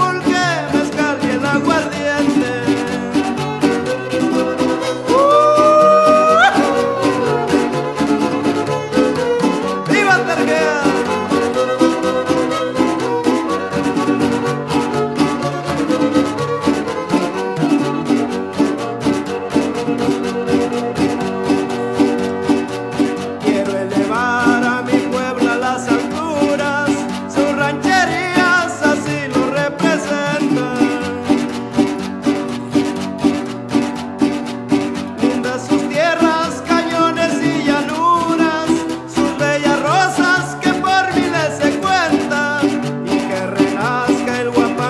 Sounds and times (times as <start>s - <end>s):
Swing music: 0.0s - 44.9s.